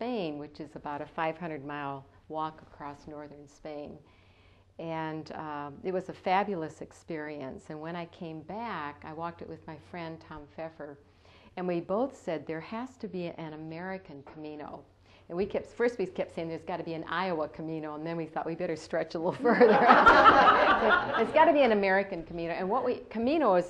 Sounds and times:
Speech: 0.0 - 4.0, 4.8 - 11.0, 11.6 - 19.6, 20.7 - 23.6.

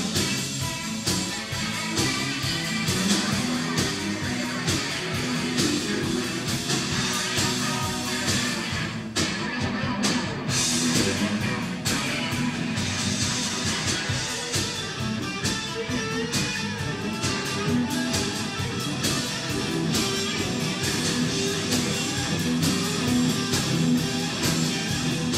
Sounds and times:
Music: 0.0 - 25.3.

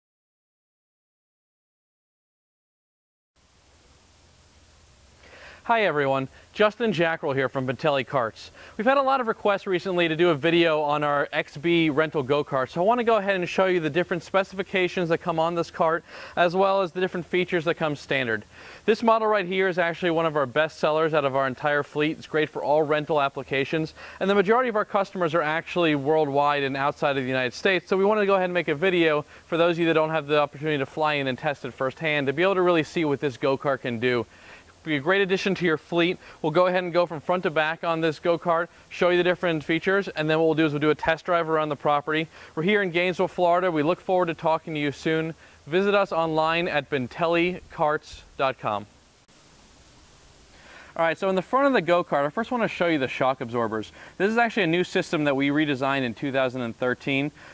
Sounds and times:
Speech: 5.7 - 48.9, 51.0 - 57.4.

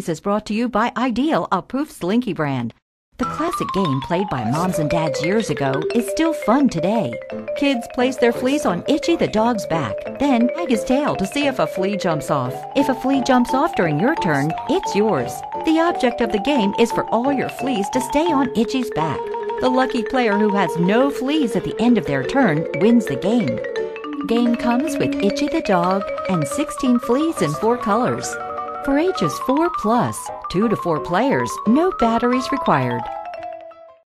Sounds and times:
Speech: 0.0 - 23.6, 24.3 - 33.1
Music: 3.2 - 34.0.

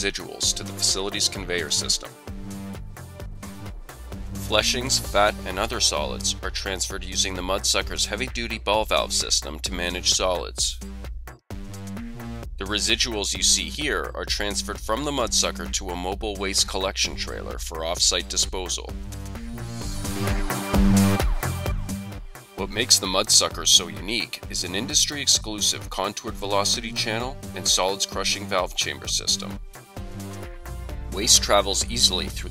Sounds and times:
Speech: 0.0 - 2.2, 4.5 - 10.8, 12.6 - 19.0, 22.6 - 29.6, 31.2 - 32.5
Music: 0.0 - 32.5.

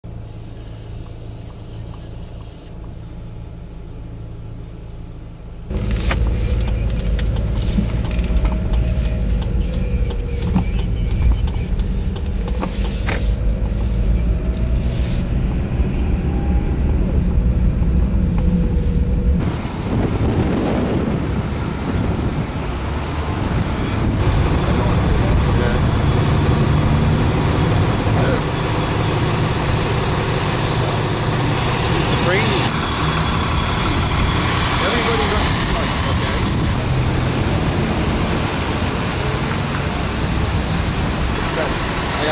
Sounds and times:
Car: 0.0 - 42.3.

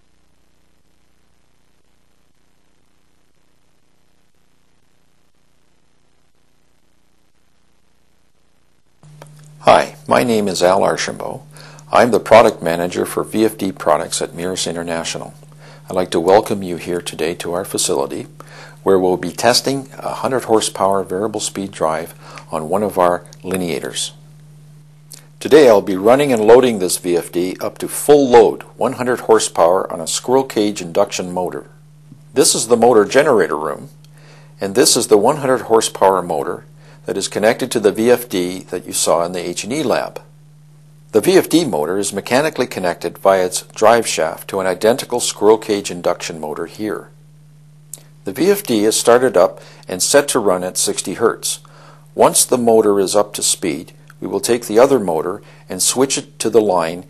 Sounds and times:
Speech: 9.6 - 24.2, 25.4 - 34.0, 34.6 - 40.3, 41.1 - 47.2, 48.2 - 57.1.

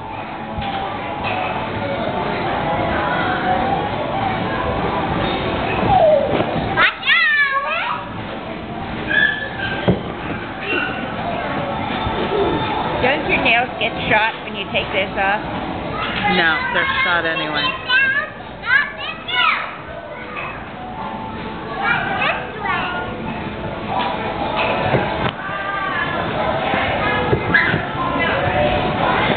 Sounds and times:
Inside, public space: 0.0 - 29.3
Children playing: 0.1 - 13.5, 15.7 - 29.3
Child speech, kid speaking: 16.0 - 20.6, 21.7 - 23.1.

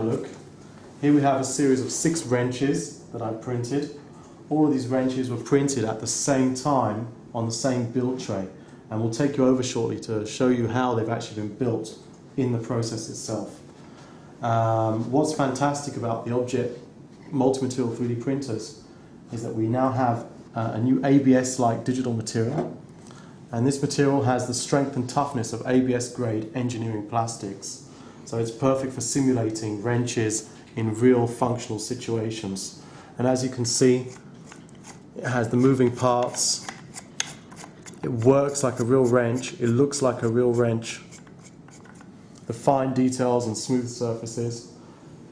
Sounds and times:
Speech: 0.0 - 0.4, 1.0 - 13.6, 14.4 - 22.8, 23.5 - 34.2, 35.2 - 36.7, 38.0 - 41.2, 42.5 - 44.8.

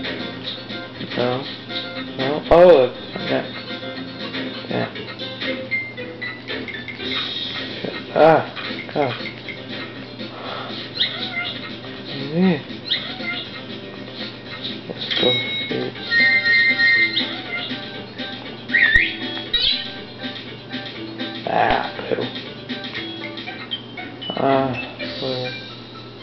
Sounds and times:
Music: 0.0 - 26.2
Speech: 2.2 - 3.5, 21.5 - 22.3.

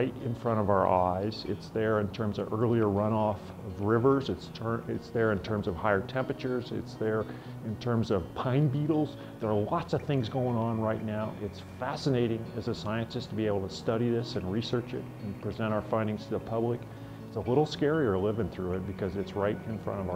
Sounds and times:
Music: 0.0 - 20.1
Speech: 0.0 - 20.1.

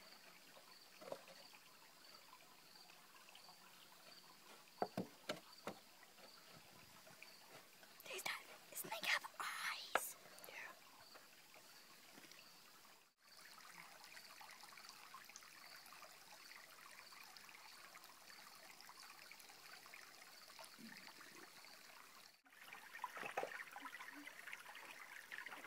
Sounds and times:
Stream: 0.0 - 25.6
Trickle, dribble: 0.0 - 25.6.

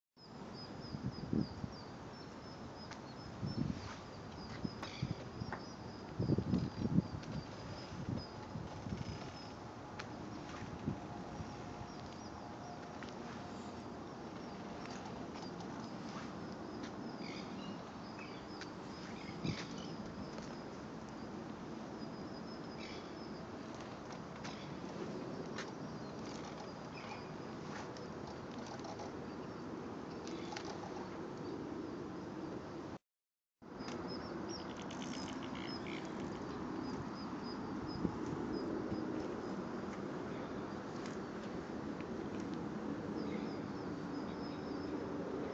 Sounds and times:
Wind noise (microphone): 0.8 - 1.8, 3.2 - 9.4, 37.9 - 39.3.

